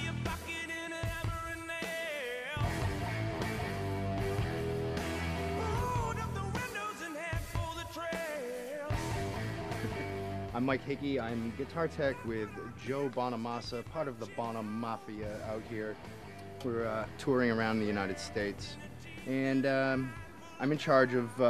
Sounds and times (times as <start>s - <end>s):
Electric guitar: 2.6s - 6.9s, 8.9s - 12.2s, 15.2s - 19.3s
Strum: 9.0s - 10.6s
Speech: 10.6s - 16.0s, 16.6s - 21.5s.